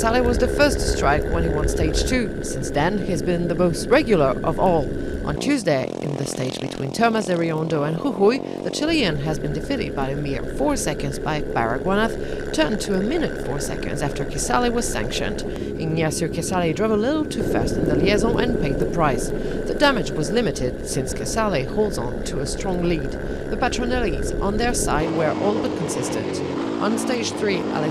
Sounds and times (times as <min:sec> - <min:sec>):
Speech: 0:00.0 - 0:27.9
Vehicle: 0:00.0 - 0:27.9.